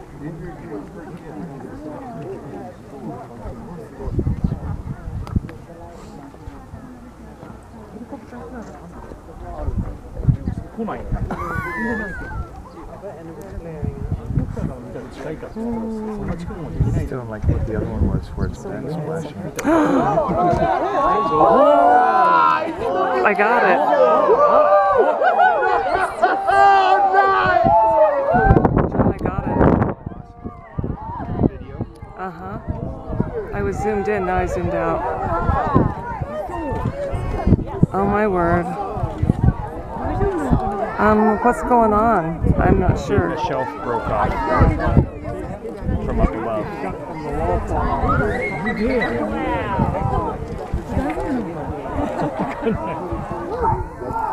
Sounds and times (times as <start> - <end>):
Speech: 31.2 - 54.3.